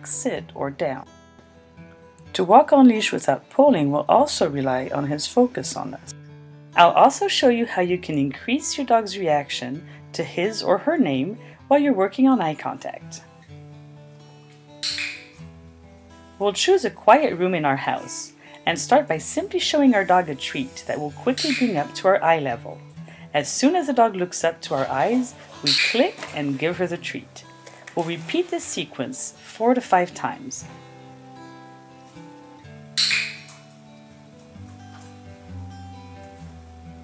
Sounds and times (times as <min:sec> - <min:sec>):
Speech: 0:00.0 - 0:01.1, 0:02.3 - 0:06.1, 0:06.8 - 0:13.2, 0:16.4 - 0:22.8, 0:23.4 - 0:27.4, 0:28.0 - 0:30.7
Music: 0:00.0 - 0:37.0.